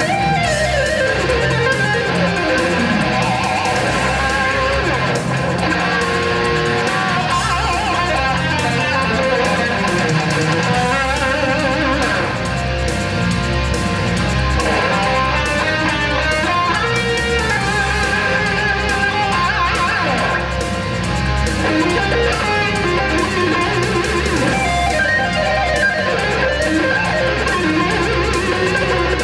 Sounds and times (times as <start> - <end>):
Electric guitar: 0.0 - 29.2
Strum: 0.0 - 29.2.